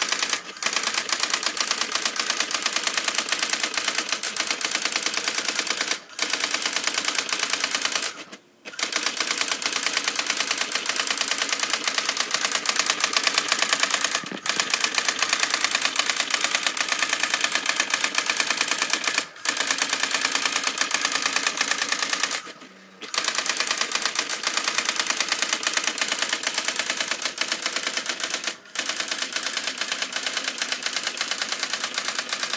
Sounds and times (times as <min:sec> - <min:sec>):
Printer: 0:00.0 - 0:32.5.